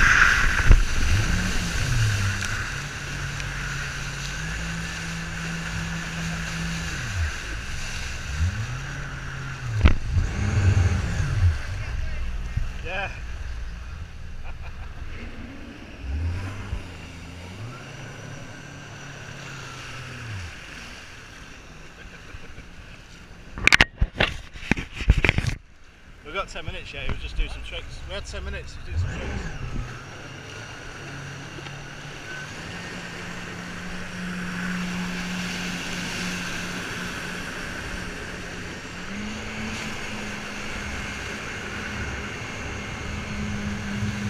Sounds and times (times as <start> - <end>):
Boat, Water vehicle: 0.0 - 44.2.